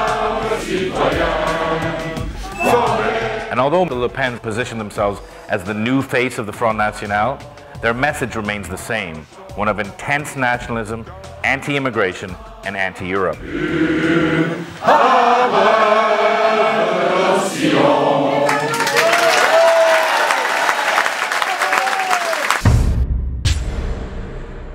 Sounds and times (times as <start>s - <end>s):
Music: 0.0s - 19.7s, 22.3s - 24.7s
Speech: 3.5s - 13.4s
Applause: 18.4s - 22.7s.